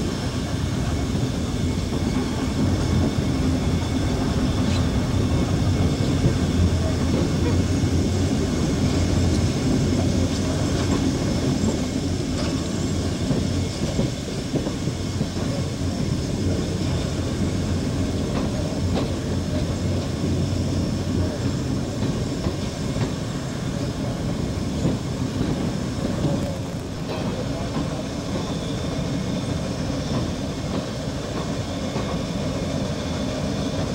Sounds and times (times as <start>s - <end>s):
Railroad car, train wagon: 0.0s - 33.9s
Train: 0.0s - 33.9s.